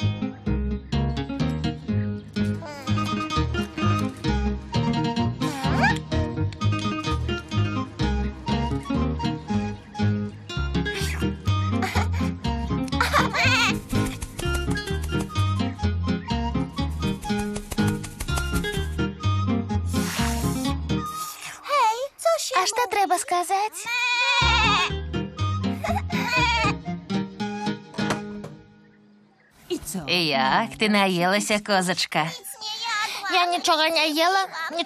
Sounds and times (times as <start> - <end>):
Music: 0.0 - 21.7, 24.4 - 31.6.